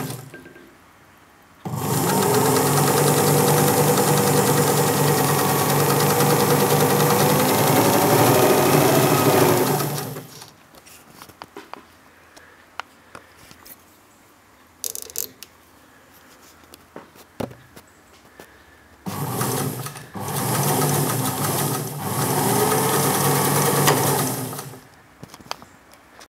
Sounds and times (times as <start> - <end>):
Sewing machine: 0.0 - 0.5, 1.7 - 10.5, 19.1 - 24.9.